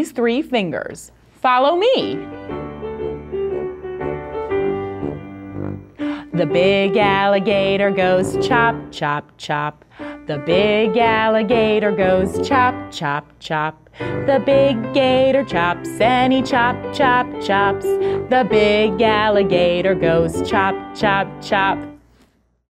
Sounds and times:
Music: 1.9s - 9.2s, 10.0s - 13.0s, 14.0s - 22.1s.

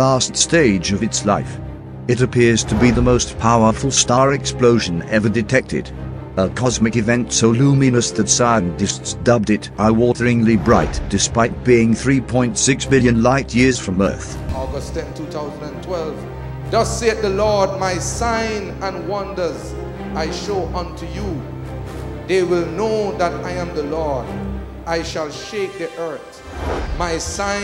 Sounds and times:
Speech: 0.0s - 21.4s, 22.3s - 24.3s, 24.9s - 26.3s, 26.9s - 27.6s
Music: 0.0s - 27.6s.

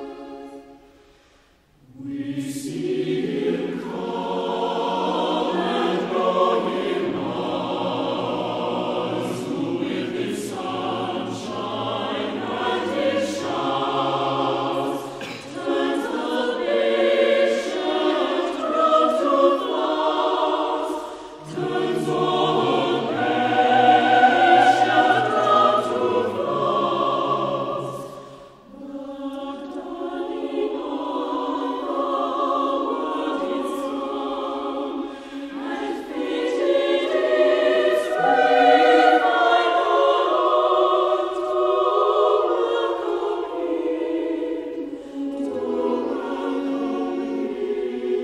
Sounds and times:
A capella: 0.0s - 48.2s
Choir: 0.0s - 48.2s.

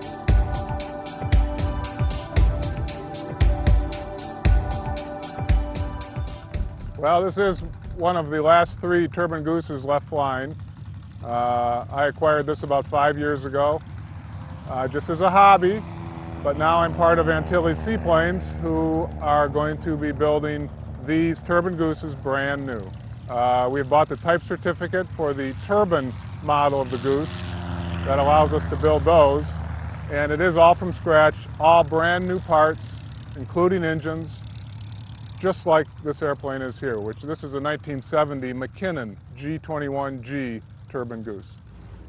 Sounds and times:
Speech: 7.0s - 10.6s, 11.2s - 13.8s, 14.7s - 15.8s, 16.4s - 27.4s, 28.0s - 34.4s, 35.4s - 41.6s.

